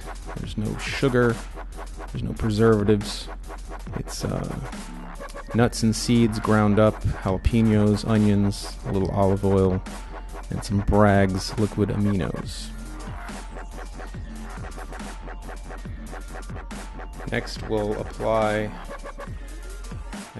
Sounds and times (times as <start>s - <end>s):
Music: 0.0s - 20.3s
Speech: 0.4s - 1.4s, 2.2s - 3.3s, 3.9s - 4.7s, 5.5s - 9.8s, 10.5s - 12.7s, 17.3s - 18.8s.